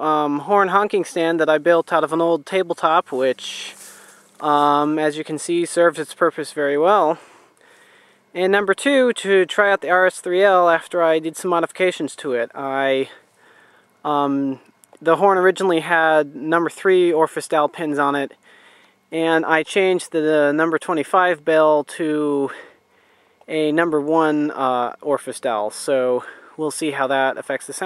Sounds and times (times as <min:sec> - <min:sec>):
Speech: 0:00.0 - 0:03.8, 0:04.4 - 0:07.2, 0:08.4 - 0:13.2, 0:14.1 - 0:18.4, 0:19.1 - 0:22.7, 0:23.5 - 0:27.8.